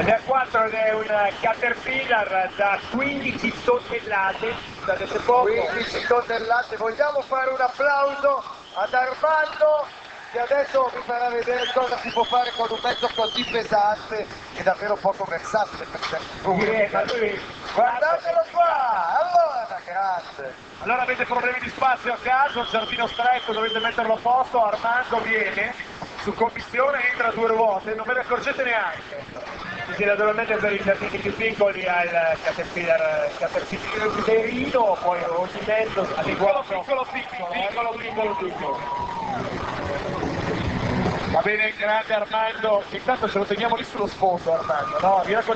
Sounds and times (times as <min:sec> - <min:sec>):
Speech: 0:00.0 - 0:38.8, 0:41.4 - 0:45.5.